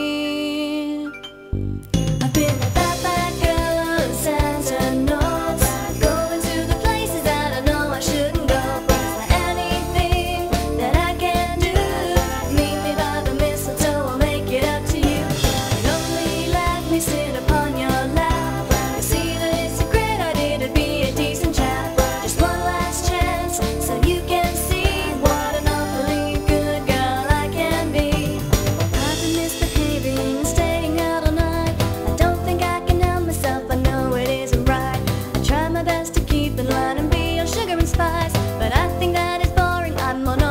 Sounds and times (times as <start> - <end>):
Music: 0.0 - 40.5.